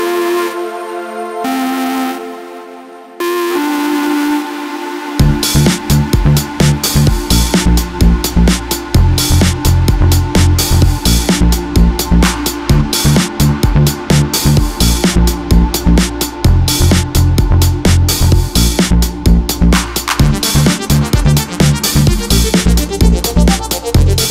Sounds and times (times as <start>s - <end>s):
Distortion: 0.0s - 24.3s
Music: 0.0s - 24.3s.